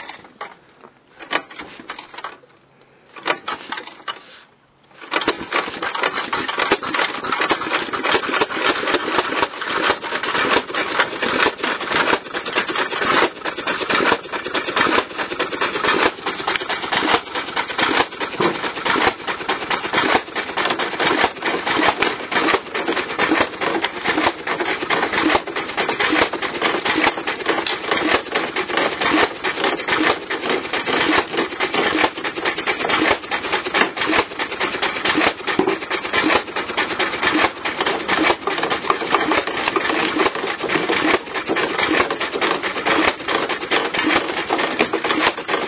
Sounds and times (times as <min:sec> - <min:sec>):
Splinter: 0:05.0 - 0:45.6.